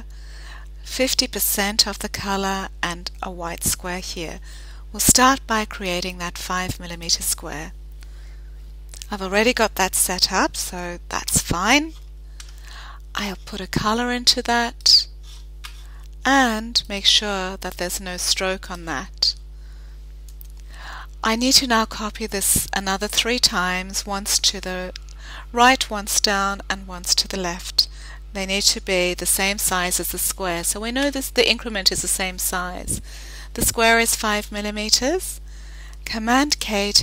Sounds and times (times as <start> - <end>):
Speech: 0.9 - 4.4, 5.0 - 7.7, 9.0 - 12.0, 13.2 - 15.1, 16.2 - 19.4, 21.2 - 24.9, 25.5 - 33.0, 33.6 - 35.4, 36.1 - 37.0.